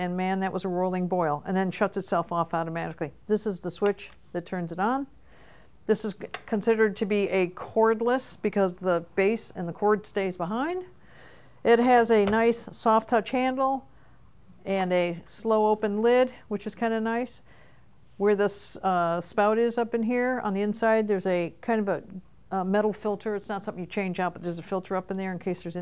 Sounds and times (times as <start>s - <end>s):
Speech: 0.0s - 5.1s, 5.9s - 10.9s, 11.6s - 13.9s, 14.6s - 17.4s, 18.2s - 25.8s.